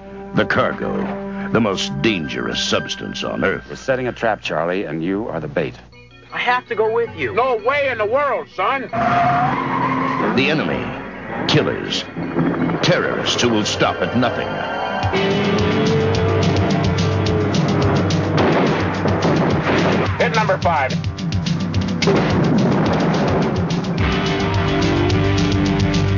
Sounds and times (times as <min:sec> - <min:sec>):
Music: 0:00.0 - 0:26.1
Speech: 0:00.4 - 0:05.8, 0:06.4 - 0:09.0, 0:10.4 - 0:12.1, 0:12.8 - 0:14.5, 0:20.2 - 0:21.0.